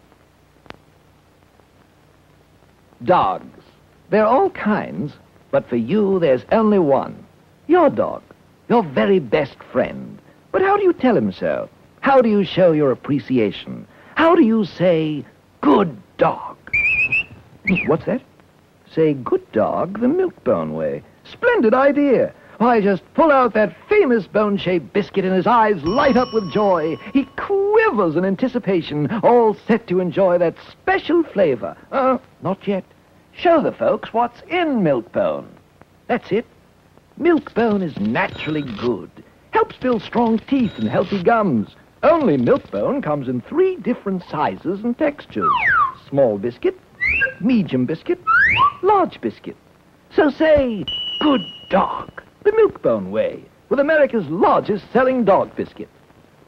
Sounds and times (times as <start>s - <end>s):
Speech: 3.0s - 16.7s, 17.7s - 36.5s, 37.2s - 56.0s.